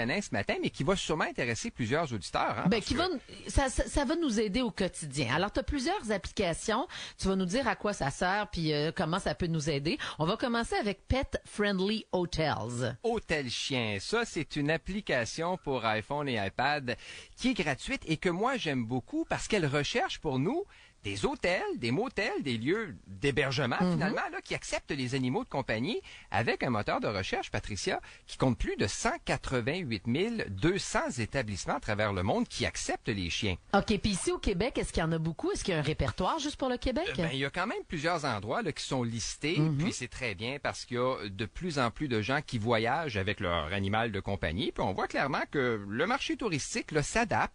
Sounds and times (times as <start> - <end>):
Speech: 0.0 - 47.5.